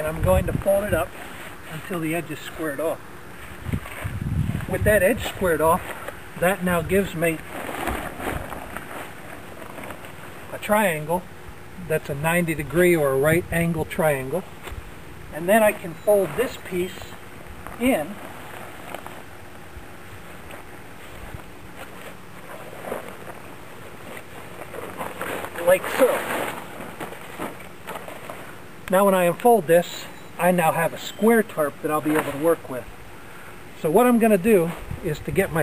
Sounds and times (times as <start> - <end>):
Speech: 0.0 - 1.1, 1.7 - 3.0, 4.7 - 5.8, 6.4 - 7.4, 10.5 - 14.5, 15.4 - 17.2, 17.8 - 18.2, 25.6 - 26.4, 28.9 - 32.9, 33.8 - 35.6
Outside, rural or natural: 0.0 - 35.6.